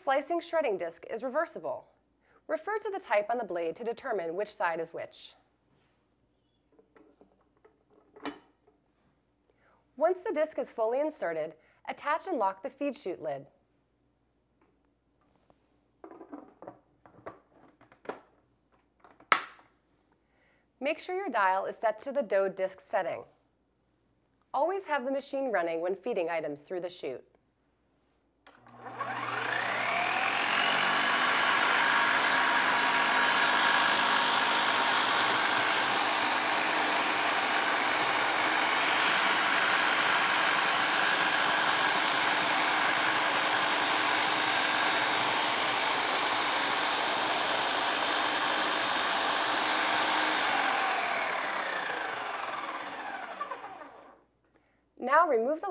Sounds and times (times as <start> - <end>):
Speech: 0.0 - 1.9, 2.5 - 5.4, 10.0 - 13.5, 20.8 - 23.3, 24.6 - 27.3, 55.0 - 55.7.